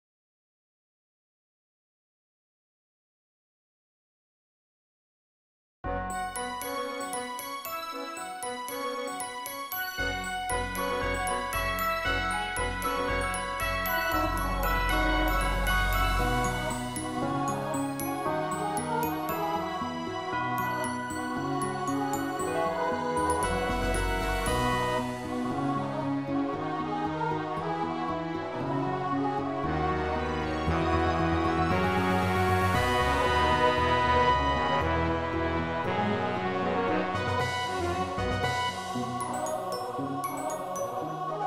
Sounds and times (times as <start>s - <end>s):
Music: 5.9s - 41.4s.